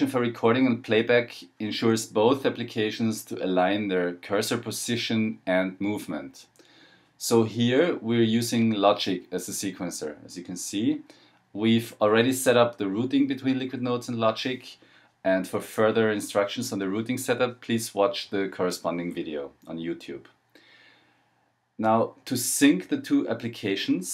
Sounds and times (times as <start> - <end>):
Speech: 0.0 - 6.6, 7.2 - 20.4, 21.8 - 24.1.